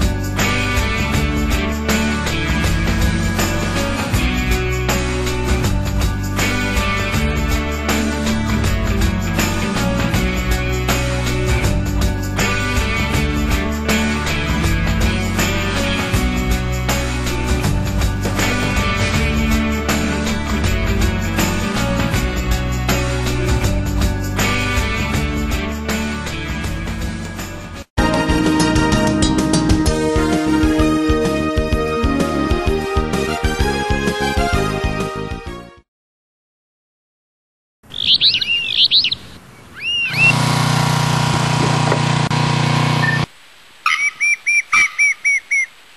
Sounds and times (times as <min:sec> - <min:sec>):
Outside, rural or natural: 0:00.0 - 0:35.8, 0:37.8 - 0:45.9
Chirp, tweet: 0:37.9 - 0:40.3.